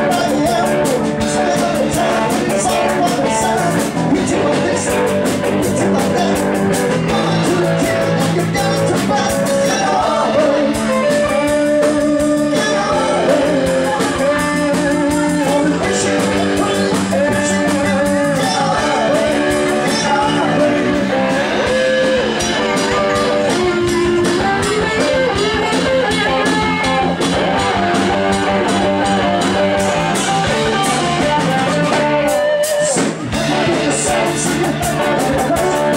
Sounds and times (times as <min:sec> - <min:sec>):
Rhythm and blues: 0:00.0 - 0:35.9.